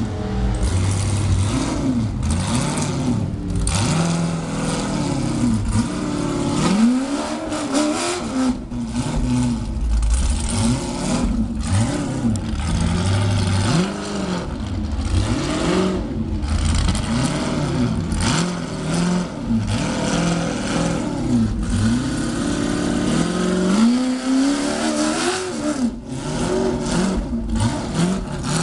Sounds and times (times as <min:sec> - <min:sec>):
Vehicle: 0:00.0 - 0:28.6.